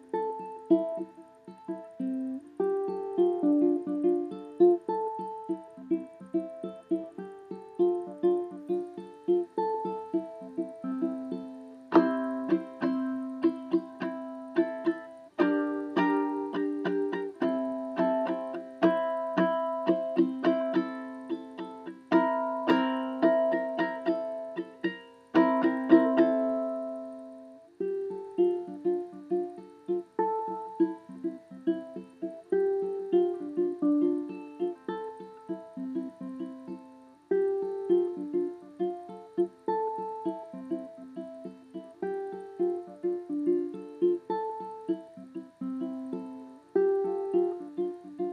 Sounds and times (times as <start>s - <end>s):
Music: 0.0s - 48.3s.